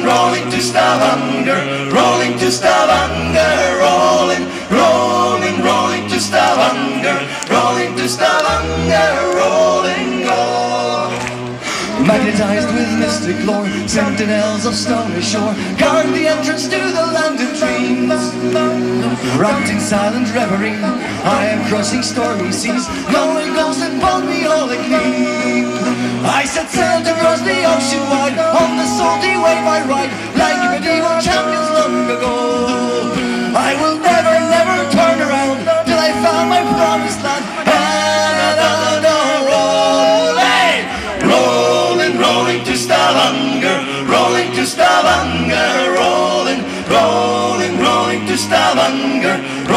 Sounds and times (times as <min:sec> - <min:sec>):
Music: 0:00.0 - 0:49.7.